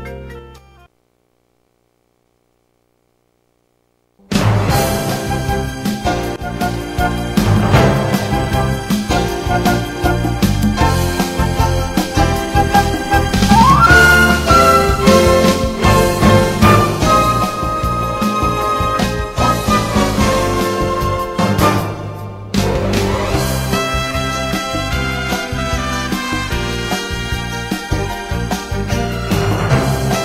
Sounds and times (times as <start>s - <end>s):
Background music: 0.0s - 0.9s, 4.2s - 30.2s.